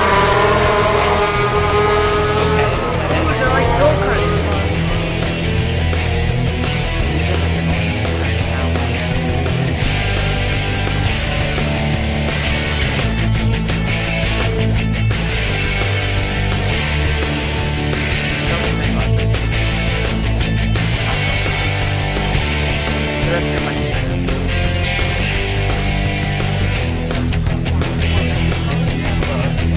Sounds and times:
Music: 0:00.0 - 0:29.7
Speech: 0:02.6 - 0:04.8, 0:07.1 - 0:09.0, 0:18.5 - 0:19.2, 0:23.2 - 0:24.3, 0:28.6 - 0:29.7.

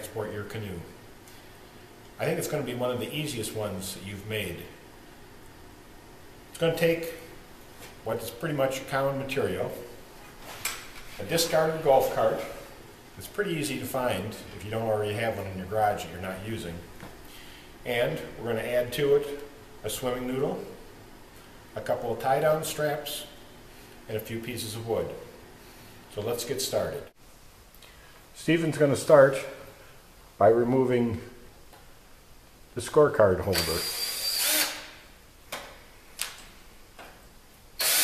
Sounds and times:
Speech: 0:00.0 - 0:01.0, 0:02.2 - 0:04.8, 0:06.6 - 0:07.3, 0:08.0 - 0:10.0, 0:11.2 - 0:16.9, 0:17.8 - 0:20.8, 0:21.8 - 0:23.4, 0:24.1 - 0:25.4, 0:26.1 - 0:27.2, 0:28.4 - 0:29.7, 0:30.4 - 0:31.4, 0:32.8 - 0:33.9.

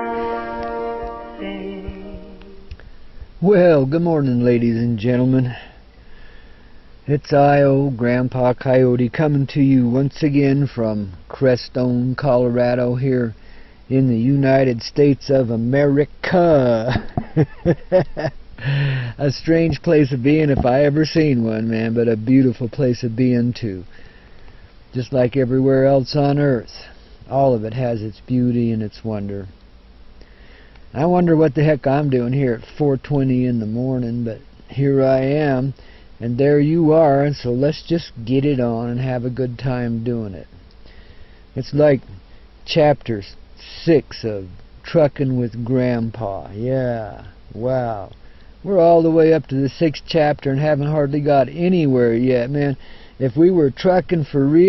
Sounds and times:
Speech: 0:03.4 - 0:05.8, 0:07.1 - 0:17.1, 0:19.1 - 0:23.9, 0:24.9 - 0:29.5, 0:30.9 - 0:40.6, 0:41.6 - 0:54.6.

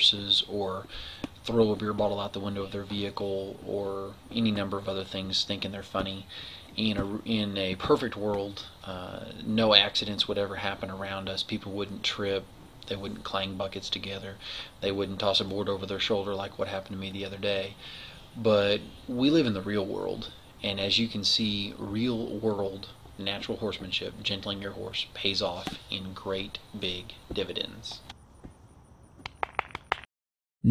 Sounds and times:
Speech: 0:00.0 - 0:17.8, 0:18.4 - 0:28.1.

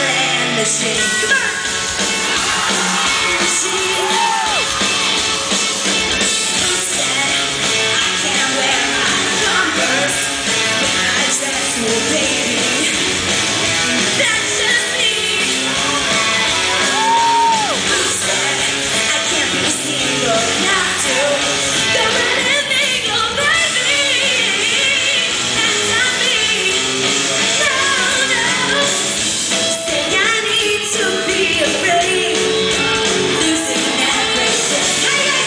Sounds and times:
Female singing: 0:00.0 - 0:01.7, 0:03.0 - 0:04.6, 0:06.4 - 0:13.0, 0:14.2 - 0:29.0, 0:29.8 - 0:35.4
Music: 0:00.0 - 0:35.4.

